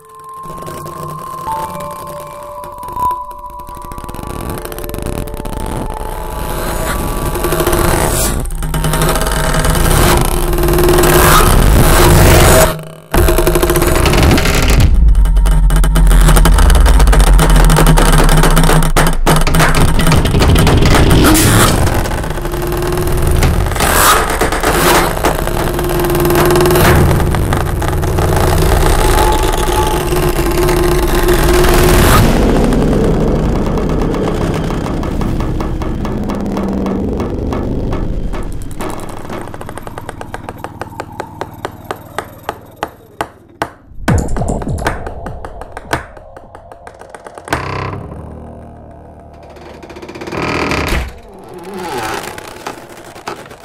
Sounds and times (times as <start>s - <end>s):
Sound effect: 0.0s - 53.6s.